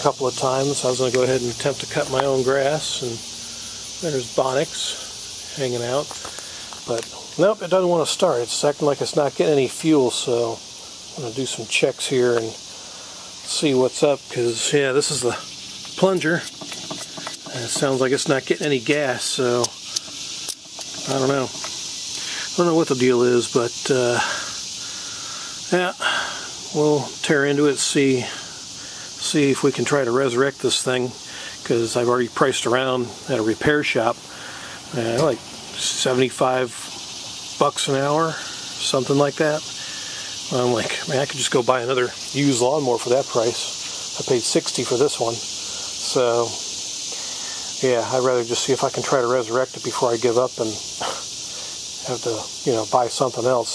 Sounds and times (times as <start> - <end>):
Speech: 0.0 - 3.2, 4.0 - 6.1, 6.8 - 10.6, 11.2 - 12.6, 13.4 - 16.5, 17.5 - 19.8, 21.0 - 21.6, 22.4 - 24.5, 25.7 - 28.5, 29.2 - 34.2, 34.9 - 36.9, 37.6 - 39.7, 40.4 - 46.6, 47.8 - 51.2, 52.0 - 53.7.